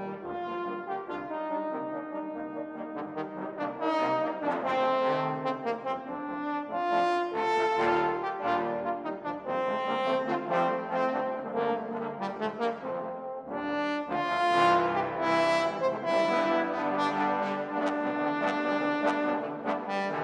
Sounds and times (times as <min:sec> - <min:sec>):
Inside, large room or hall: 0:00.0 - 0:20.2
Orchestra: 0:00.0 - 0:20.2
Trombone: 0:00.0 - 0:20.2.